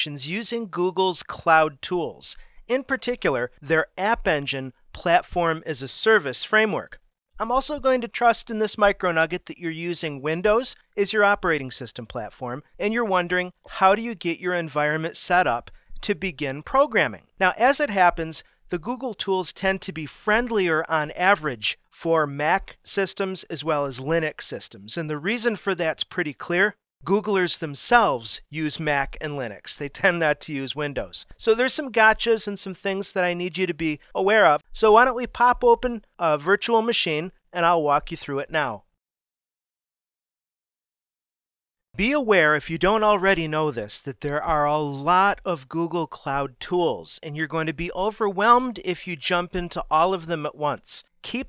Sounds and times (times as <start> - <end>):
Speech: 0.0 - 39.0, 42.0 - 51.4.